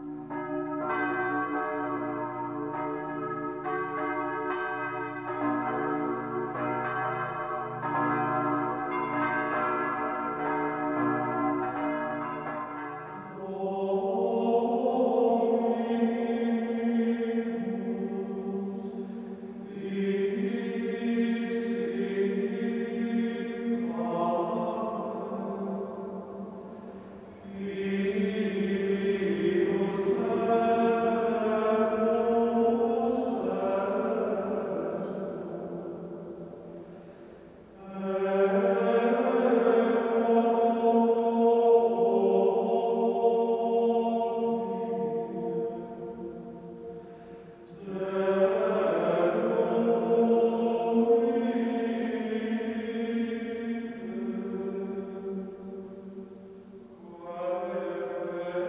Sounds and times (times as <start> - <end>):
Music: 0.0 - 58.6.